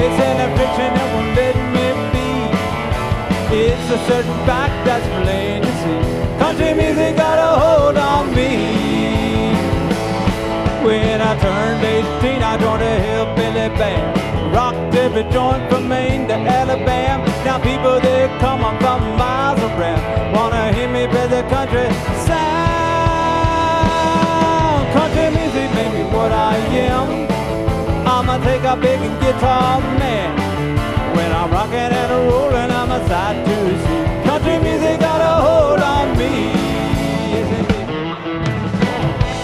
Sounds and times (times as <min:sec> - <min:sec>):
Country: 0:00.0 - 0:39.4.